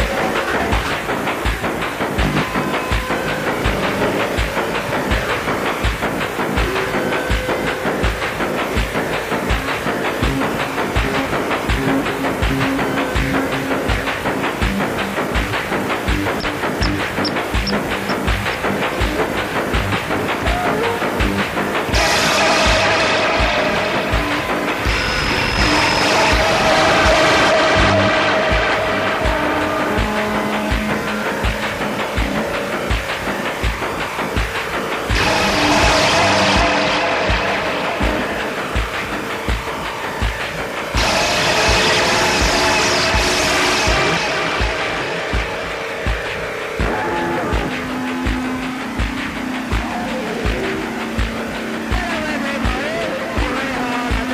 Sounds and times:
Music: 0.0 - 54.3.

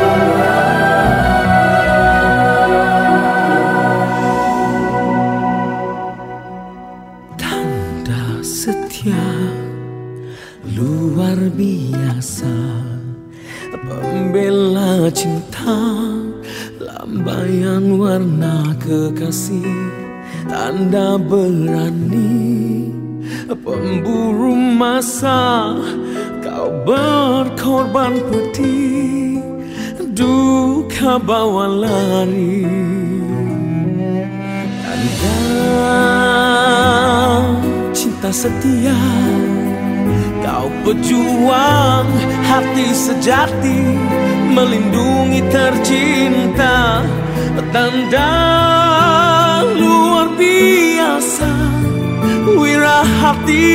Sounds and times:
Music: 0.0 - 53.7.

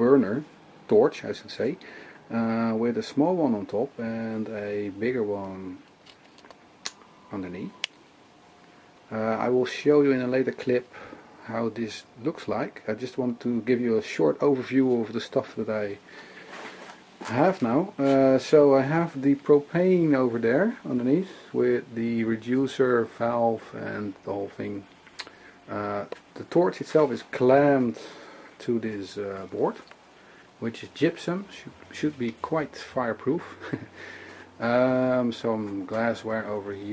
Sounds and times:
Speech: 0.0 - 5.9, 7.3 - 7.9, 9.1 - 16.0, 17.2 - 24.9, 25.7 - 29.9, 30.6 - 33.9, 34.6 - 36.9.

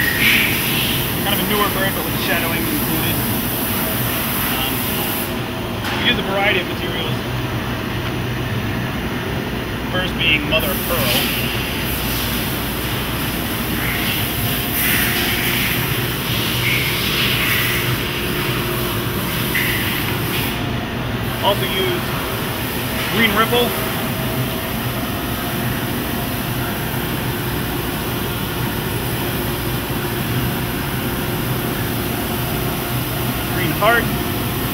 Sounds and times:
Speech: 1.2 - 3.2, 5.9 - 7.2, 9.9 - 11.3, 21.4 - 22.1, 23.1 - 23.8, 33.5 - 34.1.

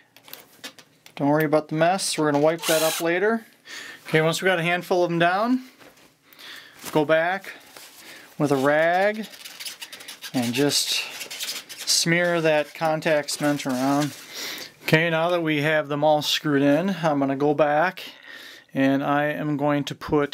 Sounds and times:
Speech: 1.2 - 3.5, 4.1 - 5.7, 6.9 - 7.6, 8.4 - 9.3, 10.4 - 11.1, 11.9 - 14.2, 14.9 - 18.2, 18.8 - 20.3.

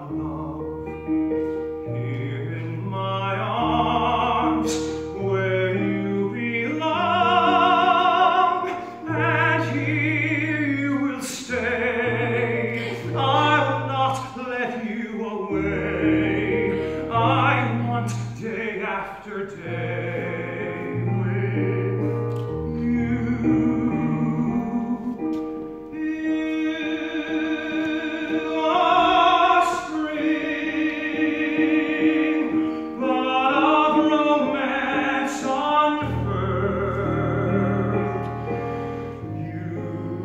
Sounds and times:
Music: 0.0 - 40.2.

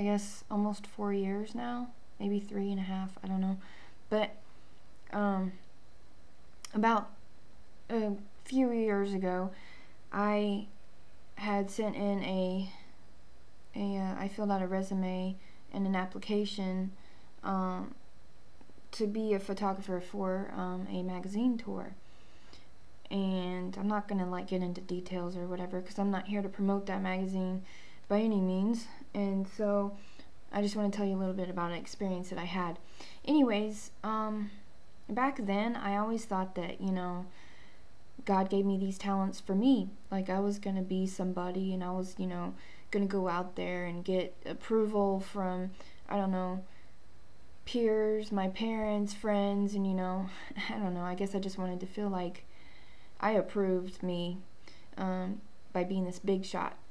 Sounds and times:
Speech: 0.0 - 4.4, 5.1 - 5.6, 6.7 - 7.2, 7.9 - 10.7, 11.4 - 12.8, 13.7 - 18.0, 18.9 - 22.0, 23.1 - 37.3, 38.2 - 46.7, 47.6 - 52.4, 53.2 - 54.4, 55.0 - 56.9.

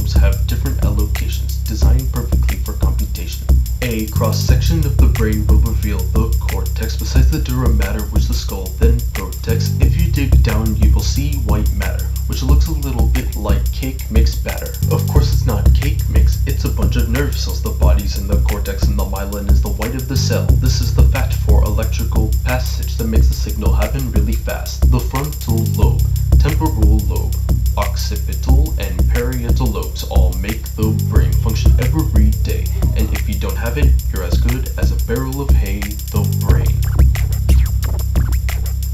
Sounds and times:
Rapping: 0.0 - 36.8
Music: 0.0 - 38.9.

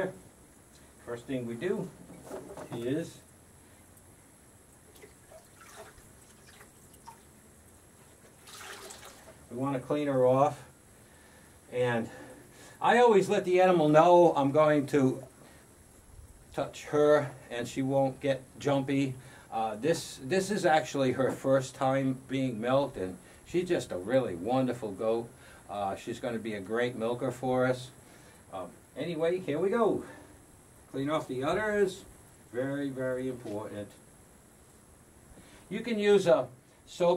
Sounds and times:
Speech: 0.0 - 0.2, 1.0 - 2.0, 2.6 - 3.3, 9.5 - 10.7, 11.7 - 12.2, 12.8 - 15.3, 16.6 - 30.2, 30.9 - 34.0, 35.7 - 37.1.

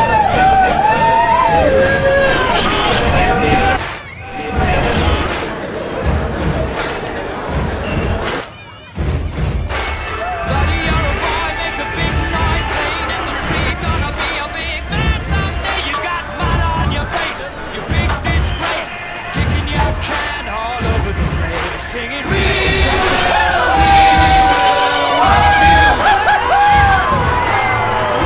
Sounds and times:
Music: 0.0 - 28.2.

